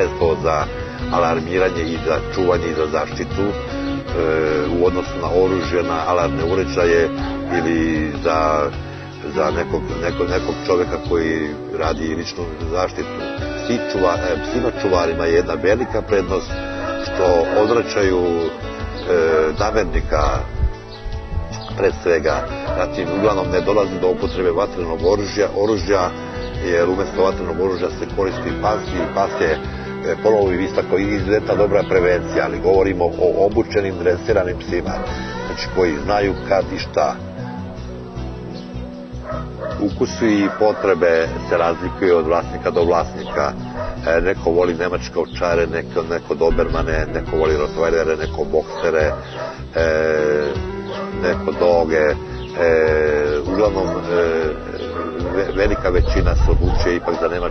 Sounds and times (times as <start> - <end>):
Speech: 0.0 - 20.5, 21.6 - 37.2, 39.8 - 49.2, 49.8 - 50.6, 51.2 - 57.5
Music: 0.0 - 57.5.